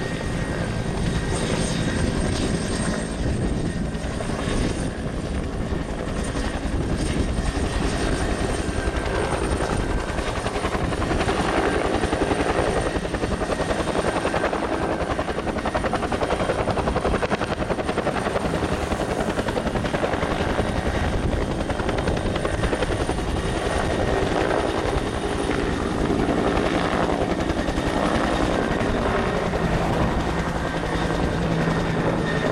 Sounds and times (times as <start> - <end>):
Helicopter: 0.0 - 32.5.